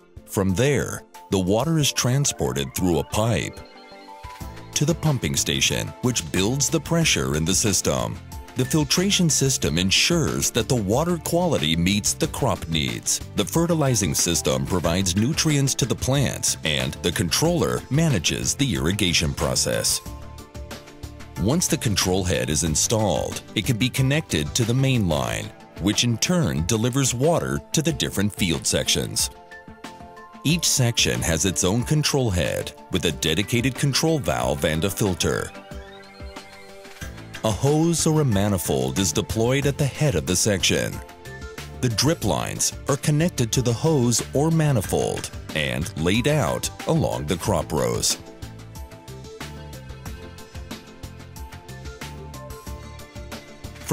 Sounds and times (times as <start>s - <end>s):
Music: 0.0s - 53.9s
Speech: 0.3s - 3.6s, 4.8s - 20.1s, 21.4s - 29.3s, 30.5s - 35.6s, 37.4s - 41.0s, 41.8s - 48.2s.